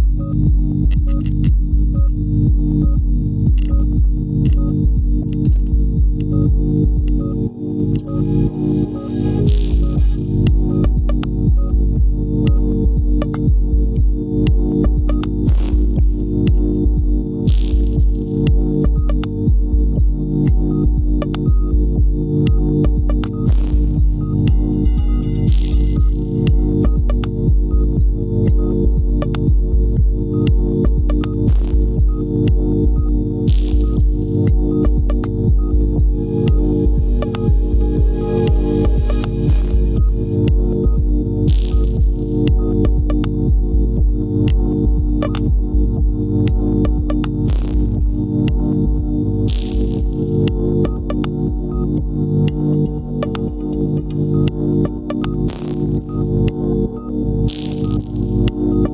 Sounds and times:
Music: 0.0 - 58.9.

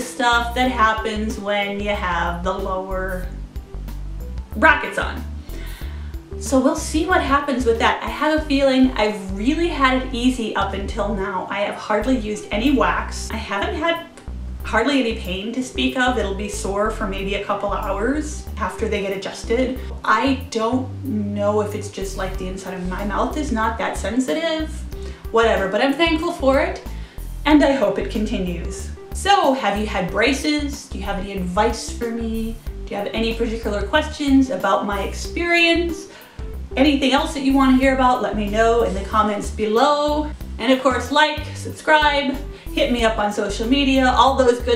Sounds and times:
Speech: 0.0 - 3.3, 4.5 - 5.3, 6.4 - 14.1, 14.7 - 36.1, 36.8 - 44.7
Music: 0.0 - 44.7.

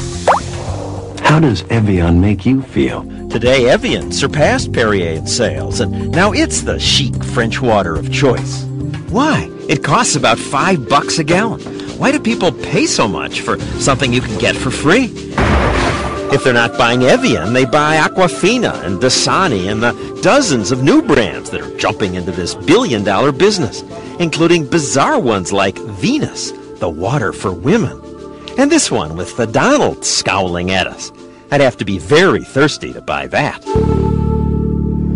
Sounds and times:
Music: 0.0 - 35.1
Speech: 1.2 - 15.1, 16.3 - 28.0, 28.6 - 33.7.

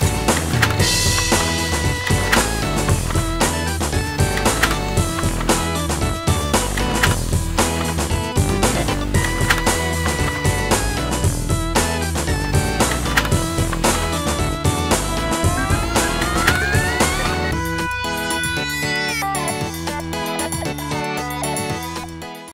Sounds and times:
Music: 0.0 - 22.5.

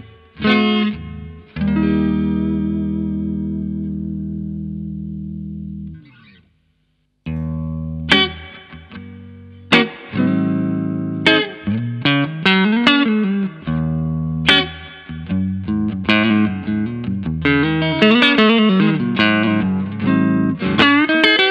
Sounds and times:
Steel guitar, slide guitar: 0.0 - 5.9, 7.3 - 21.5.

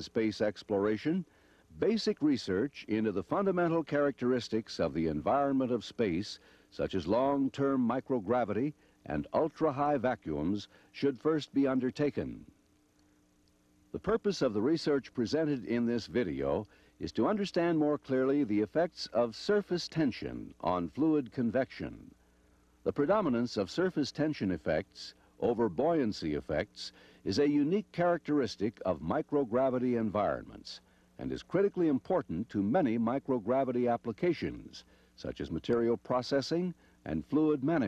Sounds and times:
Speech: 0.0 - 12.5, 14.0 - 22.2, 22.9 - 37.8.

